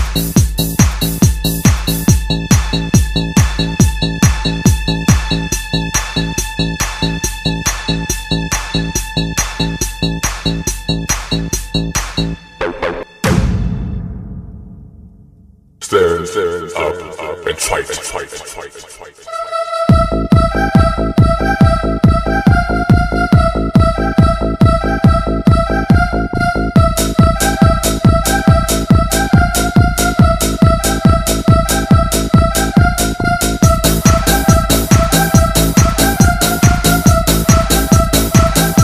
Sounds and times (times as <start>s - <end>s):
Drum and bass: 0.0s - 13.5s, 19.9s - 38.8s.